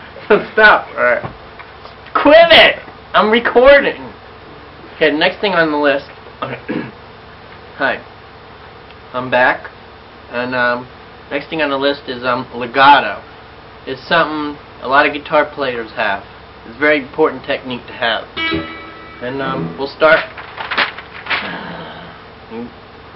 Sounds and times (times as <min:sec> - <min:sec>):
Speech: 0:00.2 - 0:01.4, 0:02.1 - 0:04.2, 0:05.0 - 0:06.9, 0:07.8 - 0:08.1, 0:09.1 - 0:18.4, 0:19.2 - 0:20.3, 0:22.5 - 0:22.8.